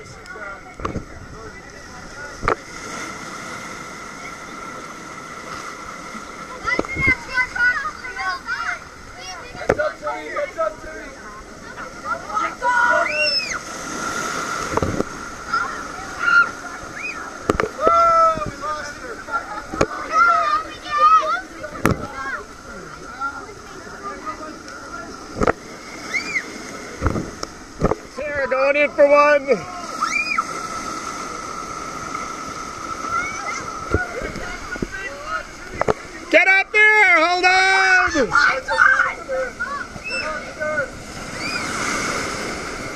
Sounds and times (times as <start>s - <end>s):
Screaming: 12.8s - 13.6s, 16.2s - 17.2s, 26.1s - 26.5s, 29.9s - 30.5s, 41.4s - 41.7s.